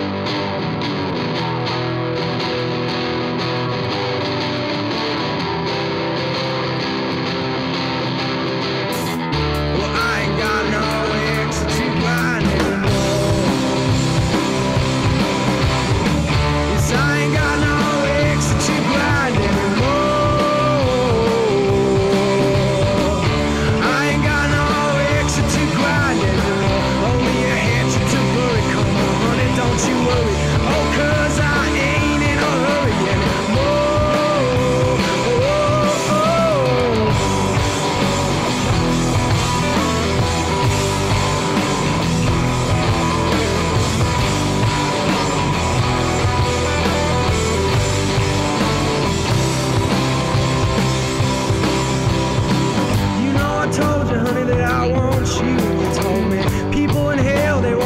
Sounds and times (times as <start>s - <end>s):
Music: 0.0s - 57.8s.